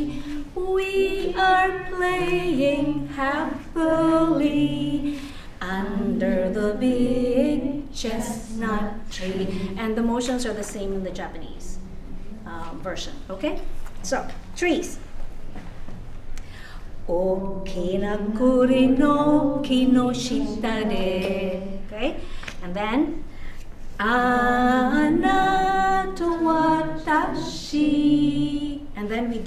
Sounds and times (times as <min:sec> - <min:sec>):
Inside, large room or hall: 0:00.0 - 0:29.4
Speech: 0:09.9 - 0:15.0.